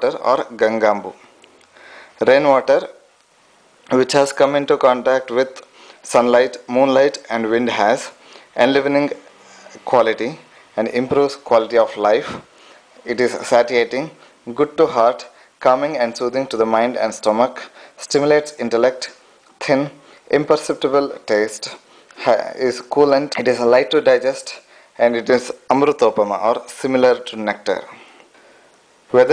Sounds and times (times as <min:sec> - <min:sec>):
Speech: 0:00.0 - 0:01.2, 0:02.2 - 0:03.0, 0:03.9 - 0:28.1, 0:29.1 - 0:29.3.